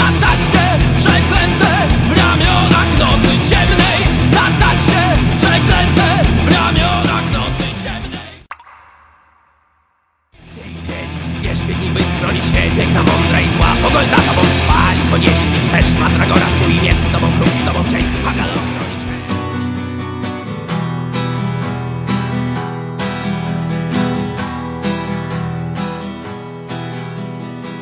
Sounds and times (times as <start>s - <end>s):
Angry music: 0.0s - 8.5s, 10.4s - 20.3s.